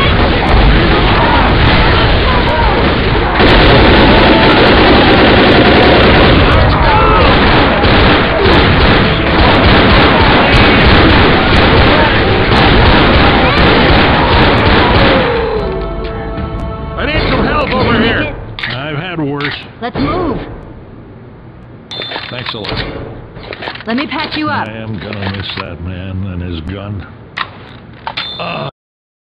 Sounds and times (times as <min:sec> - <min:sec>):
Speech: 0:23.9 - 0:27.1, 0:28.4 - 0:28.7.